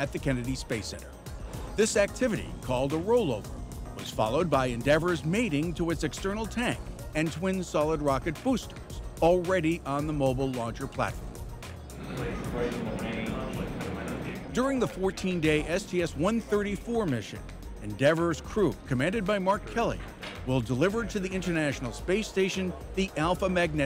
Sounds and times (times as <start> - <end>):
Speech: 0.0 - 1.1, 1.8 - 3.4, 4.0 - 11.2, 12.1 - 23.8
Music: 0.0 - 23.8.